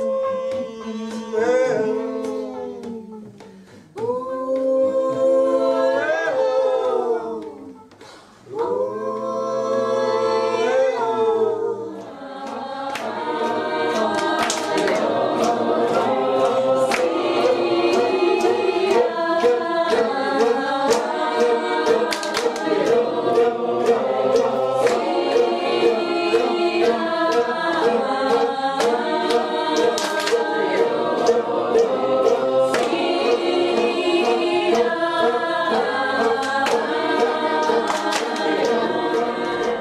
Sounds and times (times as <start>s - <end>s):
Choir: 0.0s - 39.8s.